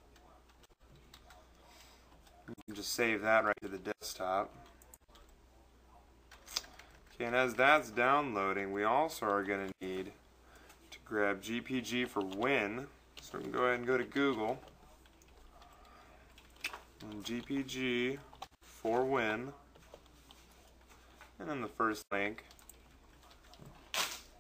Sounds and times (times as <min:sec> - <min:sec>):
Speech: 0:01.3 - 0:06.2, 0:07.2 - 0:10.2, 0:10.9 - 0:15.0, 0:17.0 - 0:19.8, 0:21.4 - 0:22.5.